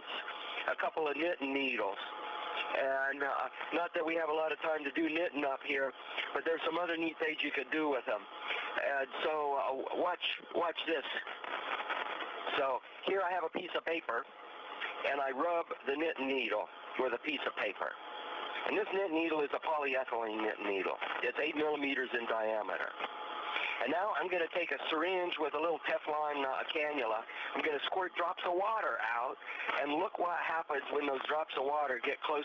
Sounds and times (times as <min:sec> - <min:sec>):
Speech: 0:00.0 - 0:11.3, 0:12.5 - 0:18.0, 0:18.6 - 0:23.0, 0:23.6 - 0:32.4.